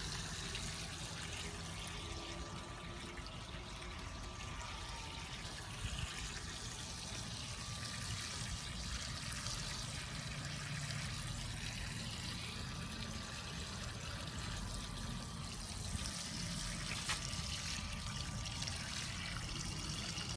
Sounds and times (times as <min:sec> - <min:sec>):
Stream: 0:00.0 - 0:20.3.